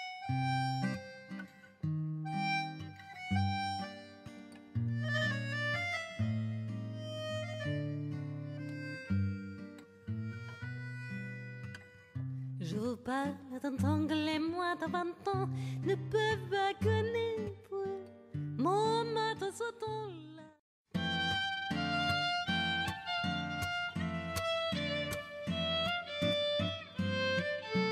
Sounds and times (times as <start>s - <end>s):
Music: 0.0s - 27.9s.